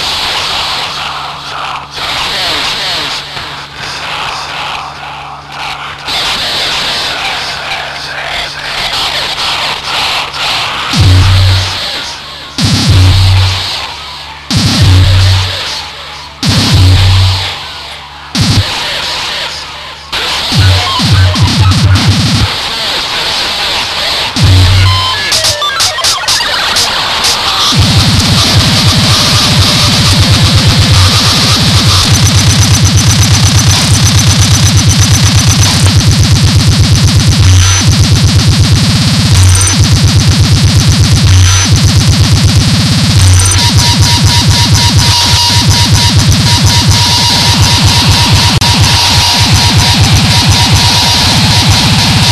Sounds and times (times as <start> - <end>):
Heavy metal: 0.0 - 52.3.